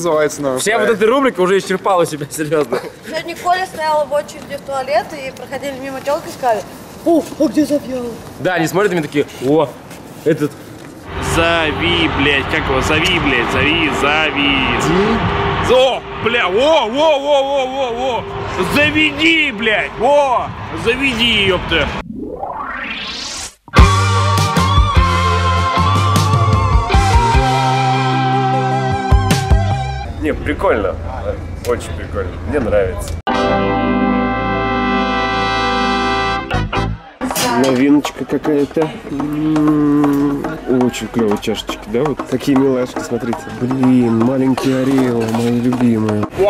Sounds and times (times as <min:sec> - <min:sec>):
Speech: 0:11.2 - 0:22.0, 0:37.4 - 0:46.4
Music: 0:23.7 - 0:30.1, 0:33.3 - 0:37.4.